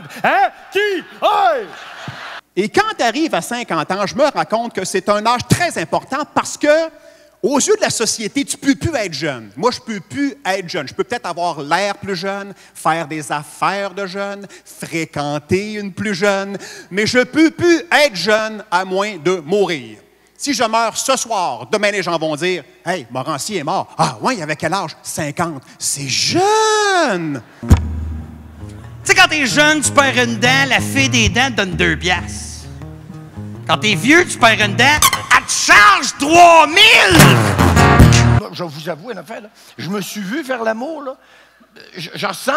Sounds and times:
Speech: 0.3 - 1.8, 2.6 - 27.4, 29.1 - 32.7, 33.7 - 37.4, 38.4 - 41.2, 41.8 - 42.5.

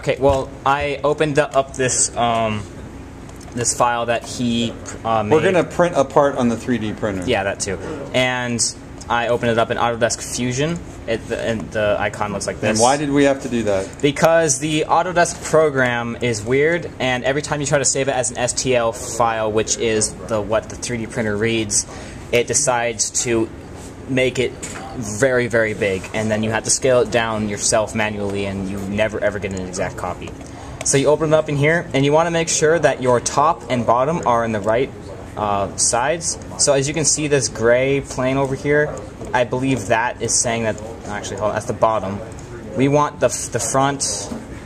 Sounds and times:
Speech: 0.0 - 2.8, 3.4 - 44.6.

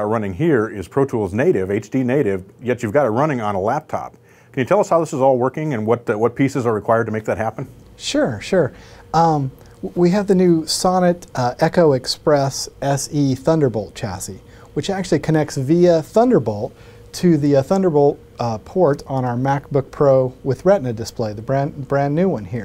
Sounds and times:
Speech: 0.0 - 22.6.

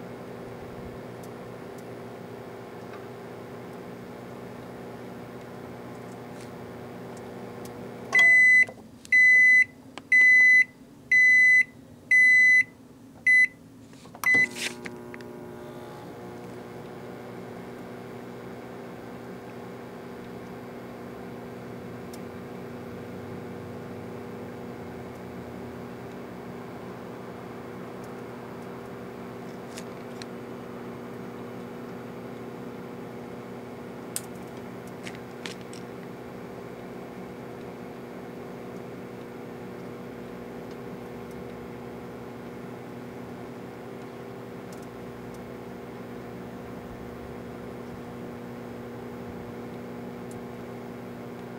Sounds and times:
Microwave oven: 0.0 - 51.5
Beep, bleep: 8.2 - 12.7, 13.3 - 13.6.

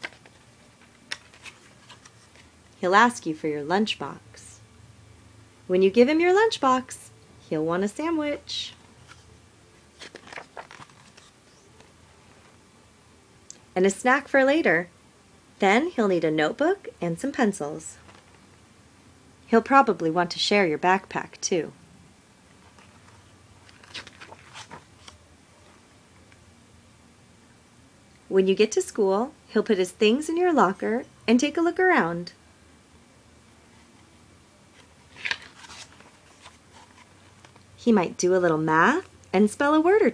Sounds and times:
Speech: 2.8 - 4.6, 5.7 - 8.8, 13.8 - 14.9, 15.6 - 18.0, 19.5 - 21.8, 28.3 - 32.4, 37.8 - 40.1.

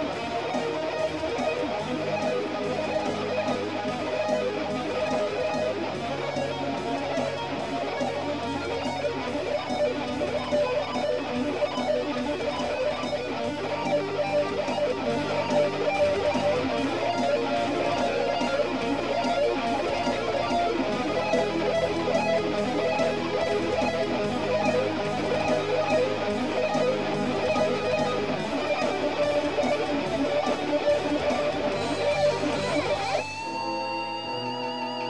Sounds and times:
Electric guitar: 0.0 - 35.0.

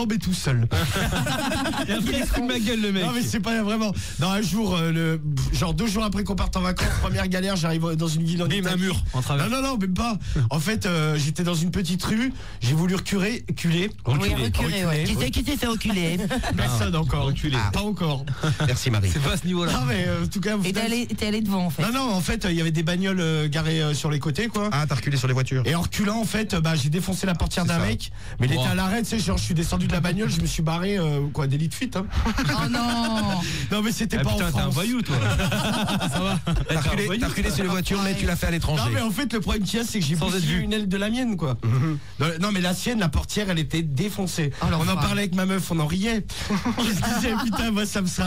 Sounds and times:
Speech: 0.0 - 48.2.

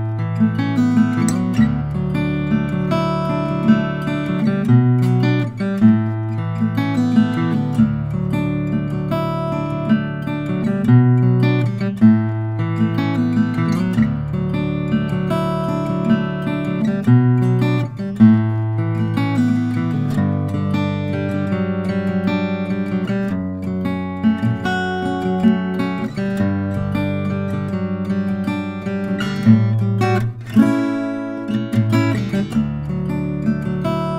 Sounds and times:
Acoustic guitar: 0.0 - 34.1
Strum: 0.0 - 34.1.

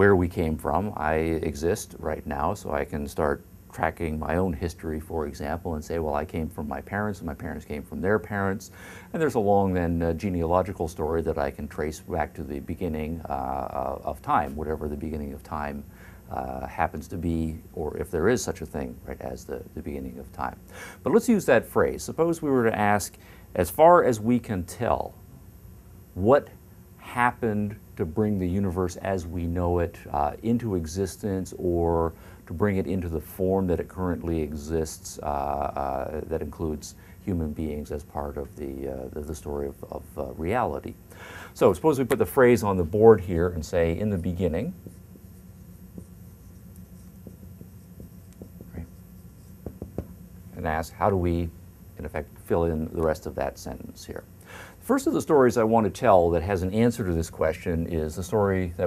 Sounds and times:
Speech: 0.0 - 25.2, 26.2 - 41.0, 41.6 - 44.9, 48.7 - 48.9, 50.5 - 58.8.

